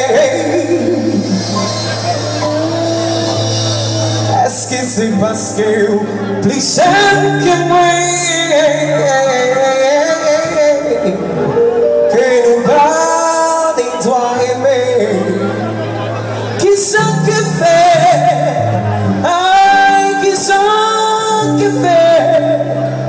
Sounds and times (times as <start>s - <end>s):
Music: 0.0s - 23.0s.